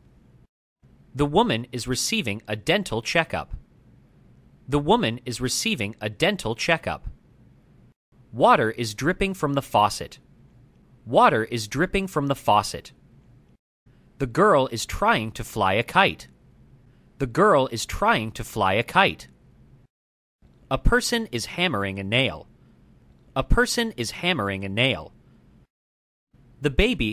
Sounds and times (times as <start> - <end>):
Speech: 1.2 - 3.6, 4.7 - 7.2, 8.4 - 10.2, 11.1 - 12.9, 14.2 - 16.3, 17.2 - 19.3, 20.7 - 22.5, 23.4 - 25.1, 26.6 - 27.1.